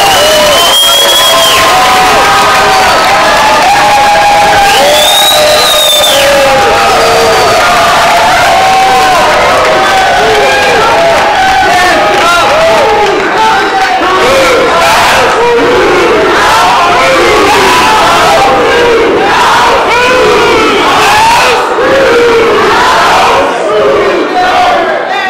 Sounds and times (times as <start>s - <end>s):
Cheering: 0.0s - 25.2s
Crowd: 0.0s - 25.2s
Battle cry: 1.2s - 25.2s.